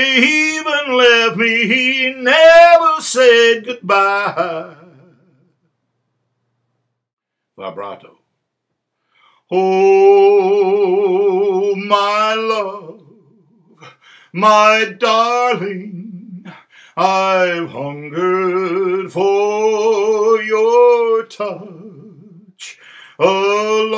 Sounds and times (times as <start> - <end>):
Male singing: 0.0 - 5.2, 9.5 - 23.9
Speech: 7.6 - 8.3.